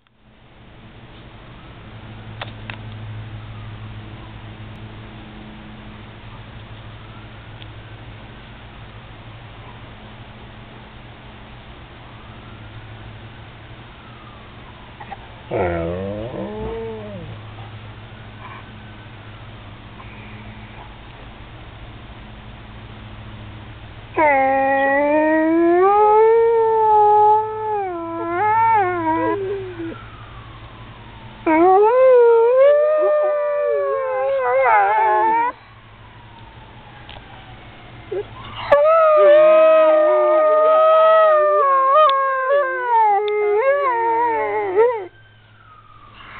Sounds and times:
Police car (siren): 3.4 - 4.4, 7.0 - 8.1, 12.1 - 19.8, 24.2 - 46.3.

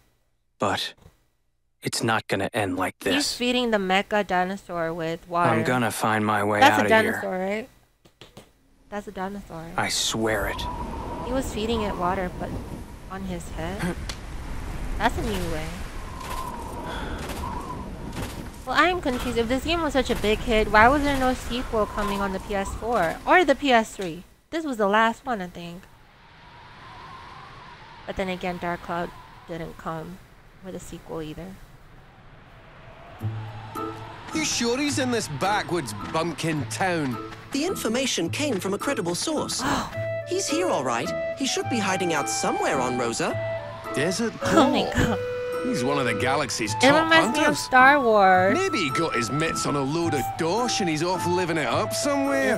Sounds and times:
Speech: 0.6 - 1.0, 1.8 - 7.7, 9.0 - 10.7, 11.3 - 12.5, 15.0 - 15.8, 18.7 - 25.8, 28.1 - 31.6, 44.0 - 52.5
Music: 33.3 - 52.5.

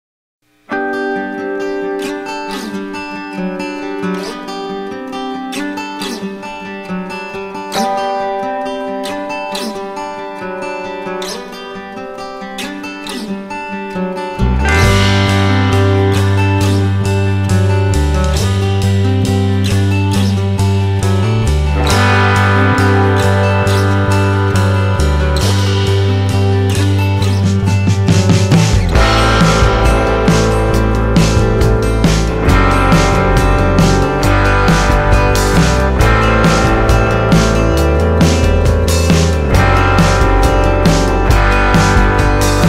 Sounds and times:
Acoustic guitar: 0.5 - 42.6.

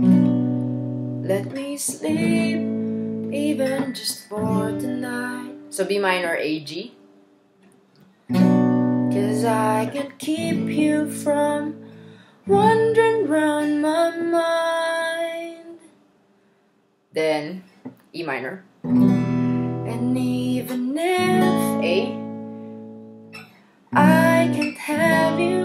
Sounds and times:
Acoustic guitar: 0.0 - 16.5, 18.8 - 25.6
Speech: 5.8 - 7.0, 17.2 - 18.7, 21.5 - 22.2.

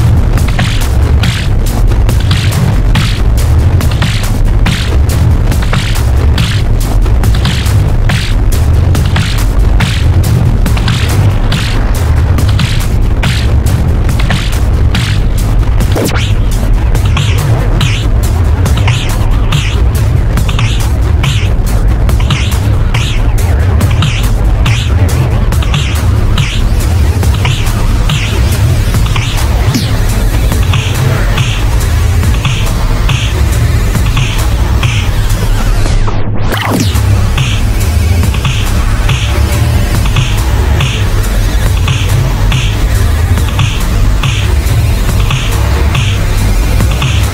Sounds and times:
Music: 0.0 - 47.3
Sound effect: 0.0 - 47.3.

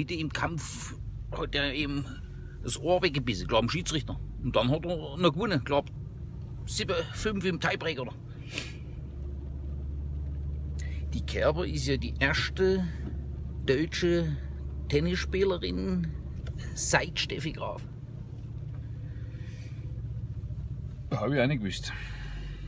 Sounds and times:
Speech: 0.0 - 5.9, 6.7 - 8.2, 11.1 - 13.0, 13.6 - 17.9, 21.1 - 22.1.

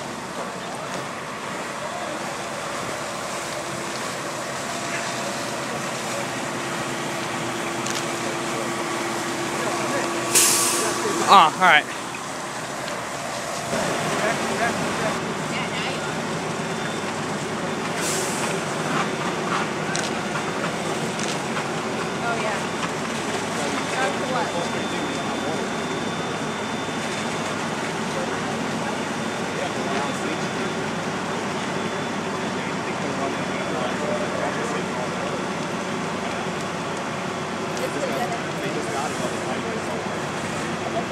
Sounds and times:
Fire: 0.0 - 41.1
Speech: 8.0 - 12.0, 28.0 - 30.7, 32.3 - 36.7, 37.7 - 41.1.

